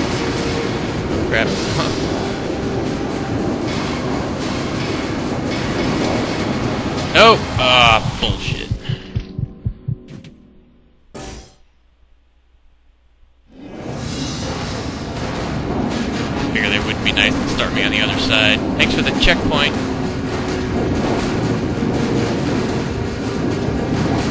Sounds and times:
Music: 0.0 - 11.7, 13.4 - 24.3
Speech: 7.2 - 8.8, 16.5 - 19.8.

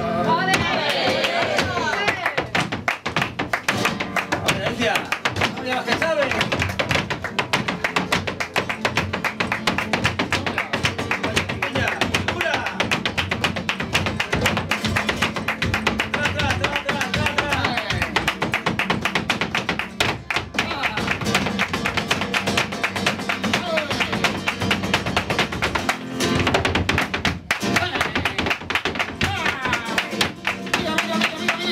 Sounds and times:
Flamenco: 0.0 - 31.7.

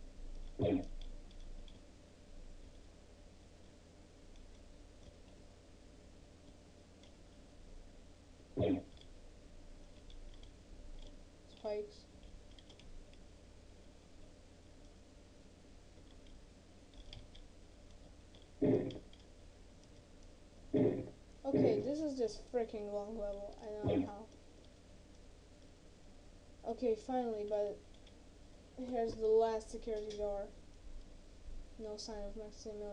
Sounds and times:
Speech: 11.5 - 12.1, 21.5 - 24.3, 26.6 - 27.8, 28.8 - 30.6, 31.8 - 32.9.

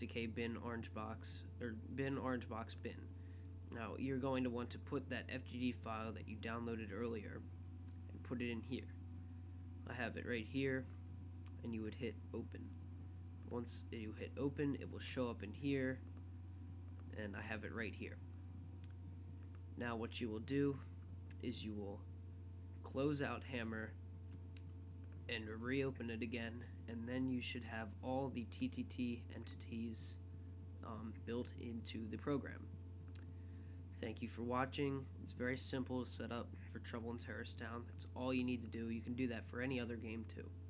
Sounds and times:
Speech: 0.0 - 3.1, 3.7 - 7.5, 8.1 - 9.0, 9.8 - 12.8, 13.5 - 16.0, 17.1 - 18.2, 19.8 - 22.1, 22.8 - 24.0, 25.3 - 30.2, 30.8 - 32.7, 34.0 - 40.6.

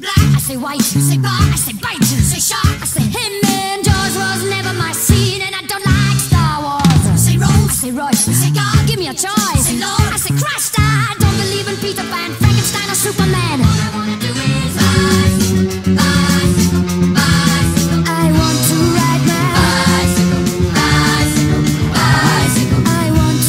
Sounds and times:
Music: 0.0 - 23.4.

